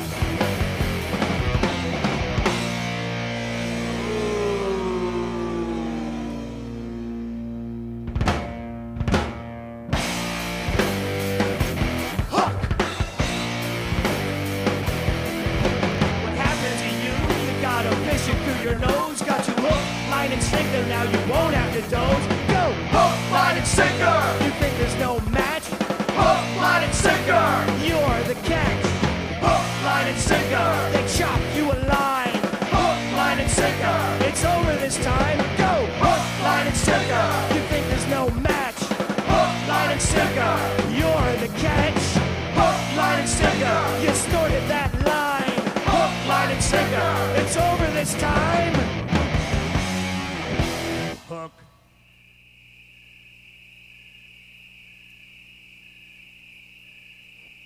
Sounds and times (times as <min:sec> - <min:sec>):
Punk rock: 0:00.0 - 0:51.5
Singing: 0:16.4 - 0:48.8.